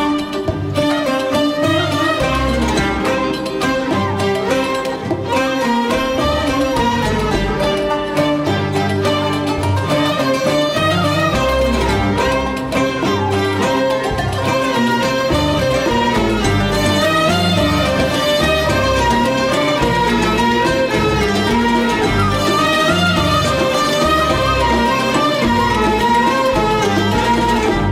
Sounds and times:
Orchestra: 0.0s - 27.9s
Violin, fiddle: 0.0s - 27.9s.

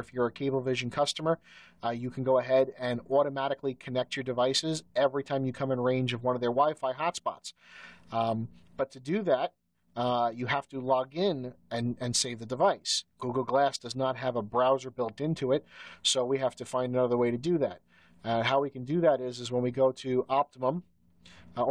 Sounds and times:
Speech: 0.0s - 20.9s.

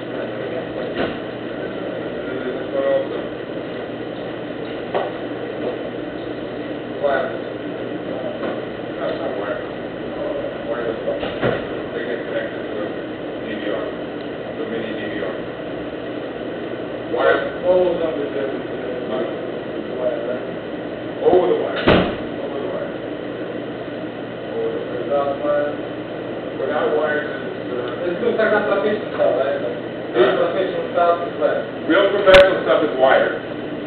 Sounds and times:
Speech: 0.0s - 3.9s, 6.8s - 14.0s, 14.6s - 15.5s, 17.1s - 20.6s, 21.2s - 23.0s, 24.5s - 25.9s, 26.6s - 33.5s.

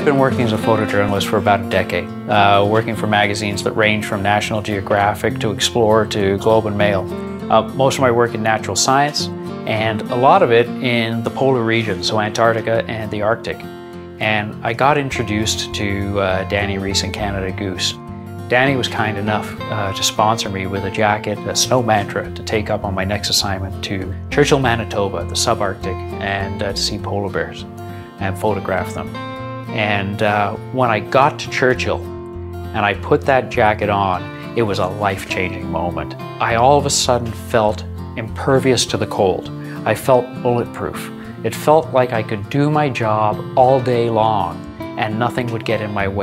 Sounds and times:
Speech: 0.0s - 32.1s, 32.7s - 46.2s
Music: 0.0s - 46.2s.

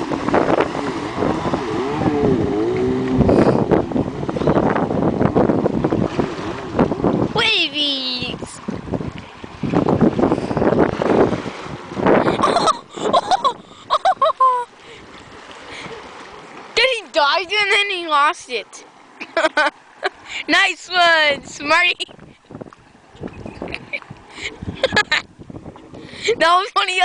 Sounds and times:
Boat, Water vehicle: 0.0s - 27.0s
Speech: 7.4s - 8.6s, 16.8s - 18.8s, 20.5s - 22.0s, 26.3s - 27.0s.

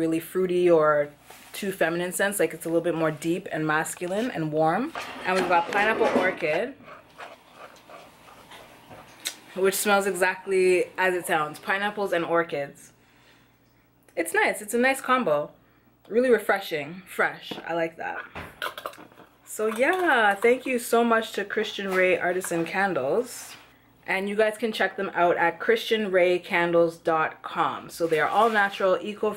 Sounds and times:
Speech: 0.0s - 6.8s, 9.6s - 12.9s, 14.2s - 18.2s, 19.5s - 29.3s.

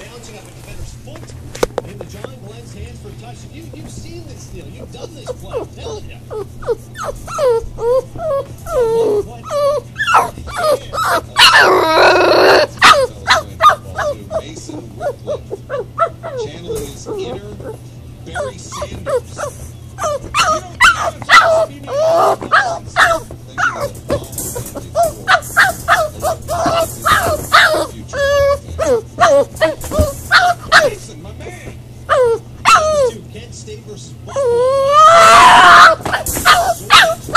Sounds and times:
Speech: 0.0s - 6.5s, 8.7s - 15.7s, 16.3s - 30.1s, 30.7s - 31.8s, 32.8s - 37.3s
Dog: 4.8s - 31.0s, 32.1s - 33.2s, 34.3s - 37.3s.

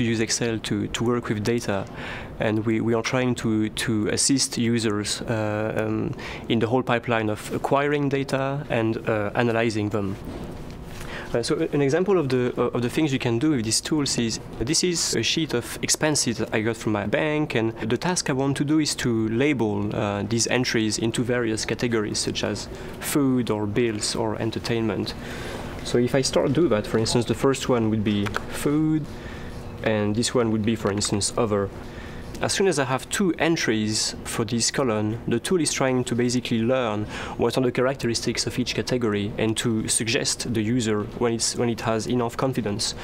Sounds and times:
Speech: 0.0s - 10.2s, 11.3s - 25.2s, 25.8s - 29.1s, 29.8s - 31.8s, 32.4s - 43.0s.

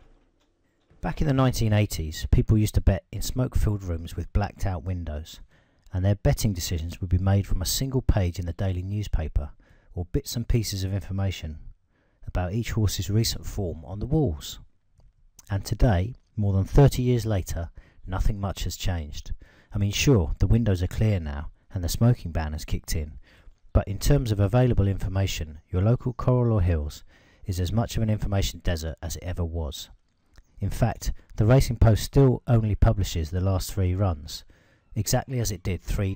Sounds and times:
Speech: 1.0s - 11.7s, 12.3s - 14.7s, 15.4s - 23.2s, 23.8s - 30.0s, 30.6s - 36.1s.

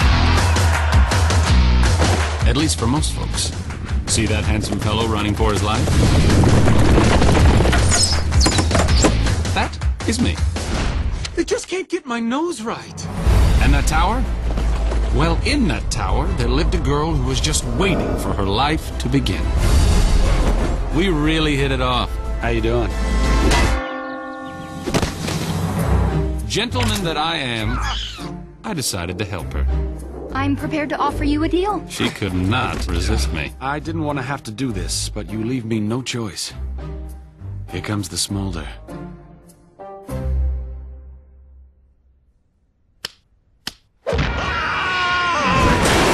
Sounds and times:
Music: 0.0s - 11.4s, 12.8s - 41.9s
Speech: 2.4s - 5.9s, 9.6s - 10.4s, 11.4s - 14.3s, 15.2s - 19.5s, 26.5s - 27.9s, 28.6s - 29.7s, 30.4s - 36.6s, 37.7s - 38.8s.

